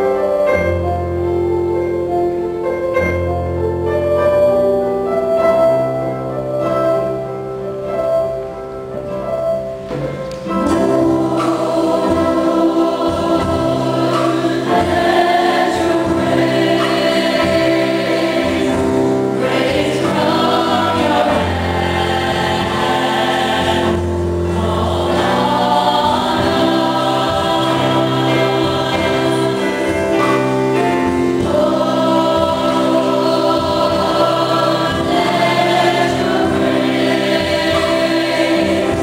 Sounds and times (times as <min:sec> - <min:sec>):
Gospel music: 0:00.0 - 0:39.0
Choir: 0:10.4 - 0:39.0.